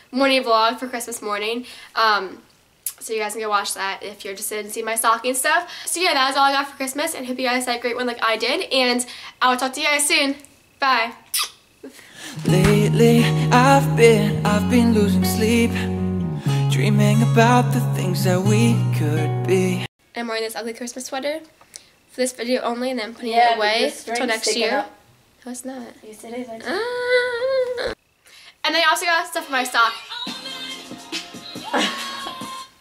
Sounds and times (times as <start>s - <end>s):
Speech: 3.0s - 11.2s, 22.2s - 27.0s, 28.7s - 30.0s
Music: 12.4s - 19.9s, 30.0s - 32.8s.